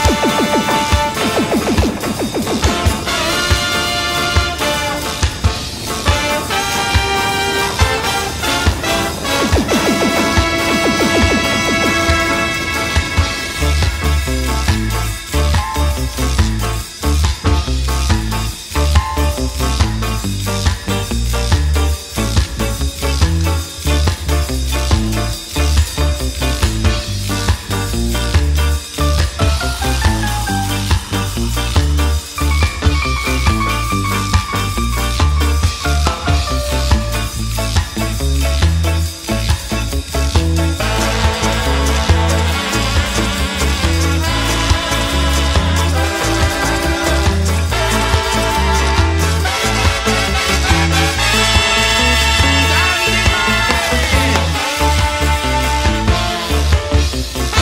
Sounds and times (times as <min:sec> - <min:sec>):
Music: 0:00.0 - 0:57.6.